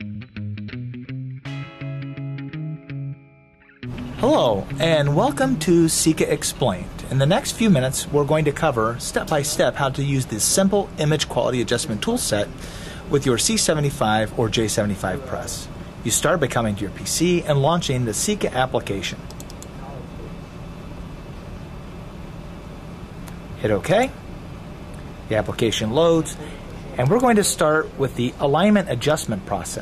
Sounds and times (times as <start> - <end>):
Speech: 4.2 - 19.2, 23.6 - 24.2, 25.3 - 29.8.